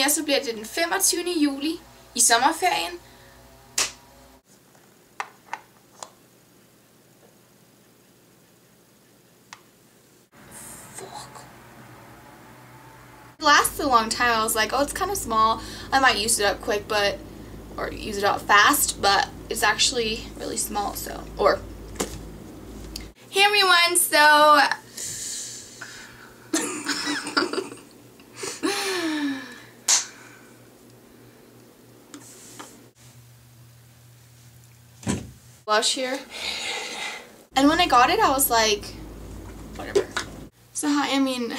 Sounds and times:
Speech: 0:00.0 - 0:03.0, 0:13.4 - 0:17.2, 0:17.8 - 0:21.6, 0:23.3 - 0:24.8, 0:35.7 - 0:36.3, 0:37.6 - 0:39.0, 0:39.8 - 0:40.2, 0:40.8 - 0:41.5.

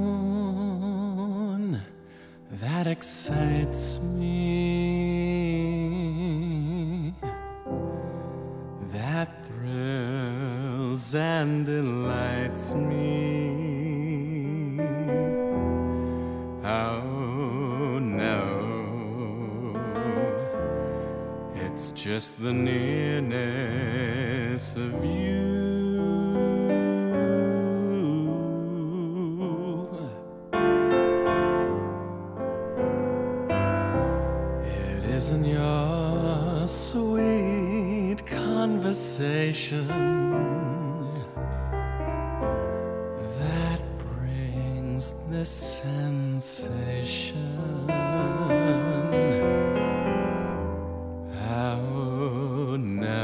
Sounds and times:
Music: 0:00.0 - 0:53.2.

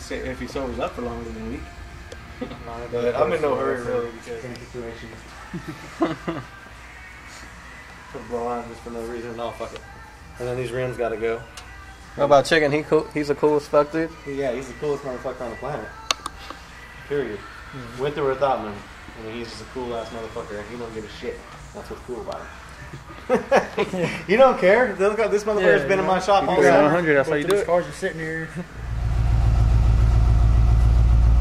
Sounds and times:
Music: 0:00.0 - 0:28.9
Speech: 0:24.3 - 0:28.7.

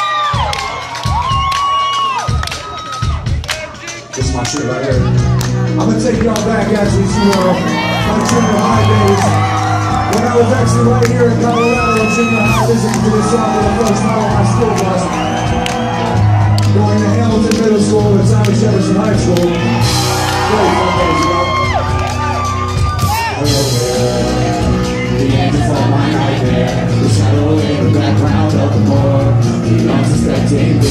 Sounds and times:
Drum: 0:00.4 - 0:30.9.

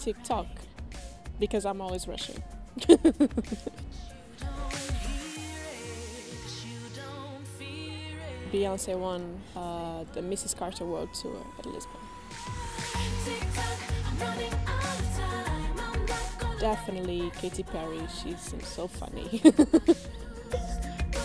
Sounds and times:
Speech: 0:00.0 - 0:00.6, 0:01.4 - 0:03.0, 0:08.5 - 0:12.0, 0:16.6 - 0:19.5
Music: 0:00.0 - 0:21.2.

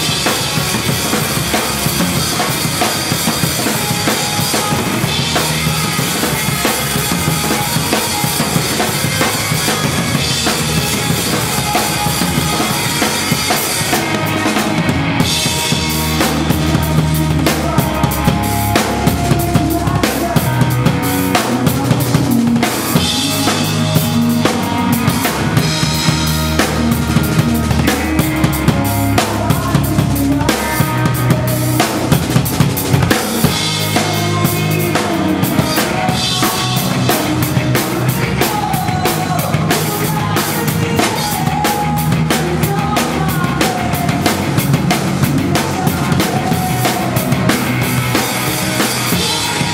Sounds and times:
Drum kit: 0:00.0 - 0:49.7.

